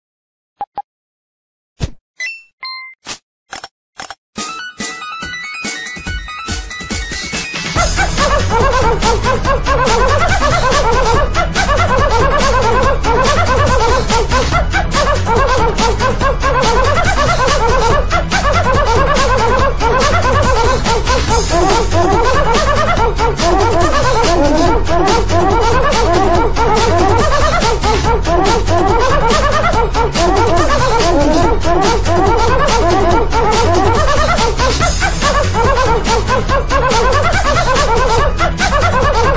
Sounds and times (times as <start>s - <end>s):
Music: 4.4s - 39.3s.